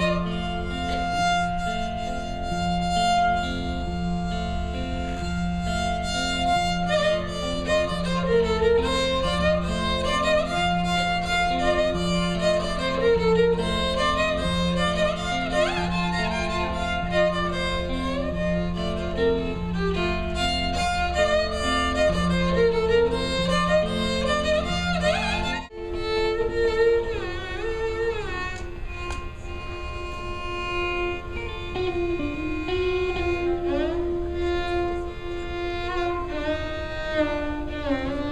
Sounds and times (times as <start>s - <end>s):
Carnatic music: 0.0s - 38.3s
Violin, fiddle: 0.0s - 38.3s.